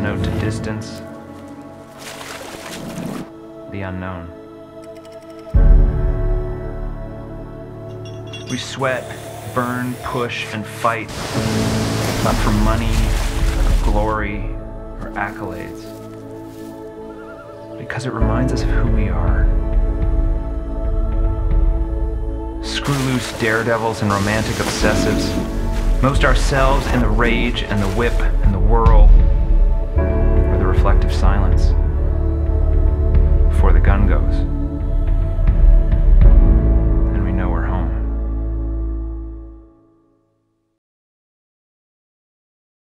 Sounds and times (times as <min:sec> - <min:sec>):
Speech: 0:00.0 - 0:01.0, 0:03.7 - 0:04.3, 0:08.5 - 0:11.1, 0:12.2 - 0:13.1, 0:13.8 - 0:15.9, 0:17.8 - 0:19.5, 0:22.6 - 0:29.2, 0:30.5 - 0:31.8, 0:33.6 - 0:34.5, 0:37.1 - 0:38.0
Music: 0:00.0 - 0:40.8
Rowboat, canoe, kayak: 0:00.9 - 0:03.4, 0:11.0 - 0:15.3, 0:22.6 - 0:30.0.